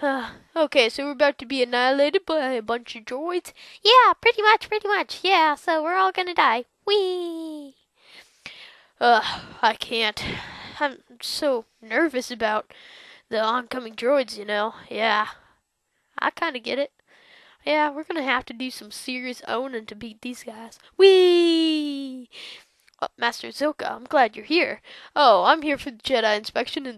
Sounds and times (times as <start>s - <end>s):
Speech: 0.0s - 7.7s, 9.0s - 12.7s, 13.3s - 15.4s, 16.2s - 16.9s, 17.6s - 22.3s, 23.0s - 26.9s.